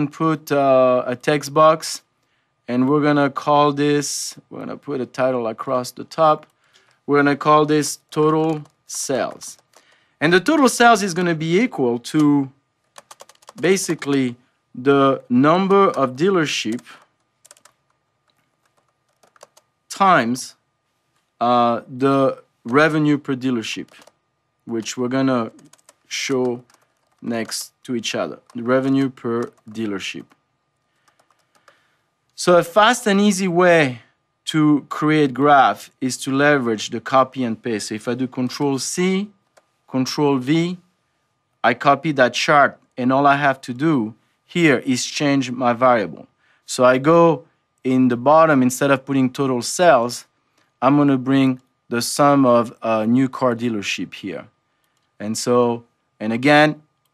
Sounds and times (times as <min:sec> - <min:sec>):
Computer keyboard: 0:08.1 - 0:10.0, 0:12.9 - 0:14.1, 0:15.8 - 0:19.7, 0:23.8 - 0:24.2, 0:24.8 - 0:30.4, 0:31.0 - 0:31.8.